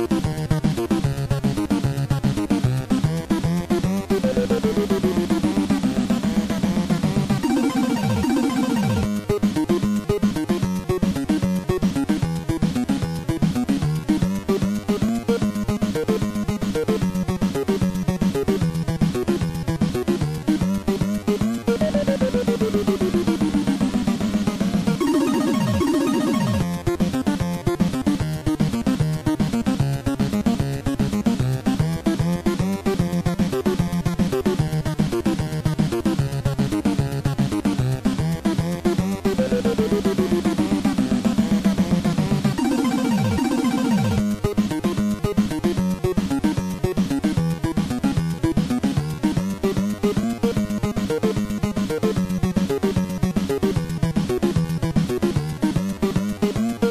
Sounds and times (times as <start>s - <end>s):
Theme music: 7.4s - 9.1s, 25.0s - 26.7s, 42.6s - 44.3s.